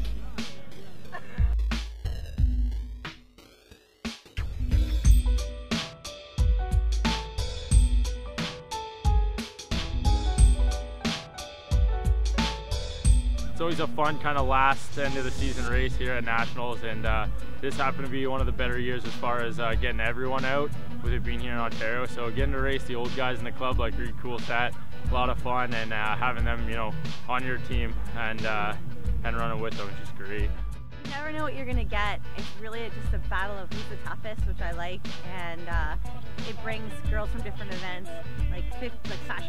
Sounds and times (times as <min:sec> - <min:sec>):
Music: 0:00.0 - 0:39.4
Outside, urban or manmade: 0:00.0 - 0:39.4
Speech: 0:13.6 - 0:30.5, 0:31.1 - 0:39.4.